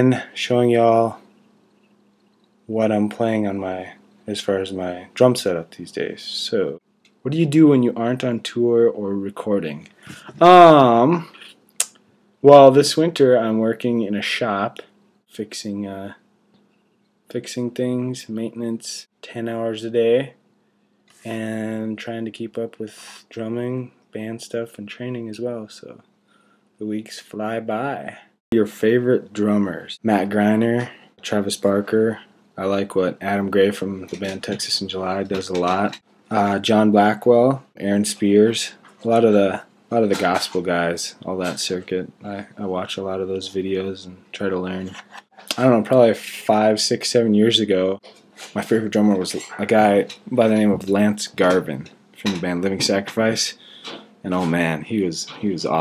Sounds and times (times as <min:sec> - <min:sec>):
Speech: 0:00.0 - 0:01.3, 0:02.7 - 0:11.5, 0:12.4 - 0:16.2, 0:17.3 - 0:20.4, 0:21.2 - 0:26.0, 0:26.8 - 0:53.6, 0:54.2 - 0:55.8.